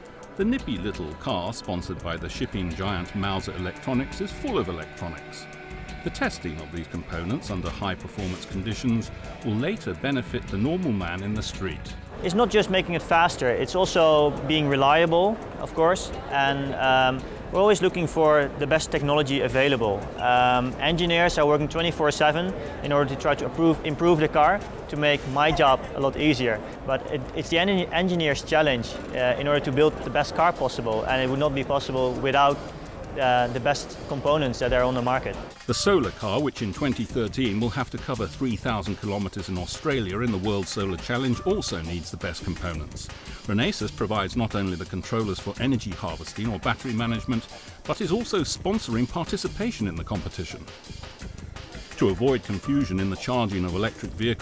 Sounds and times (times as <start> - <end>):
Electronica: 0.0 - 37.5
Speech: 0.4 - 5.4, 6.1 - 32.6, 33.2 - 50.7, 52.0 - 54.4.